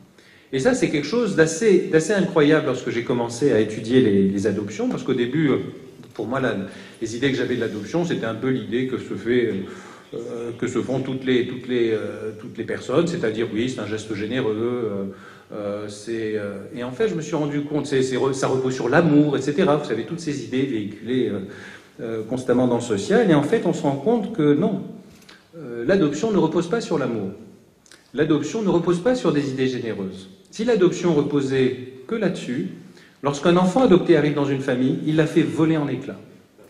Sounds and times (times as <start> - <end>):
Speech: 0.5 - 27.4, 28.0 - 36.4.